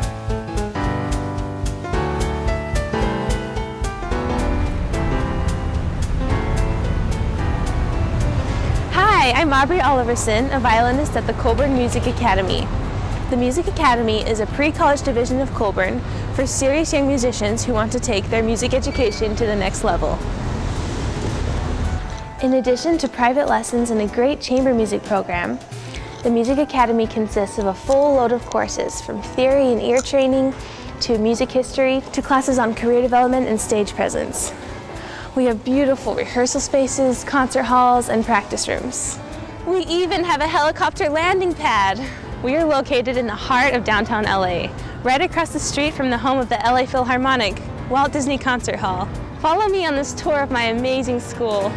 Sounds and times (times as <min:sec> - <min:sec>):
Music: 0:00.0 - 0:51.7
Speech: 0:13.3 - 0:20.2, 0:22.4 - 0:25.6.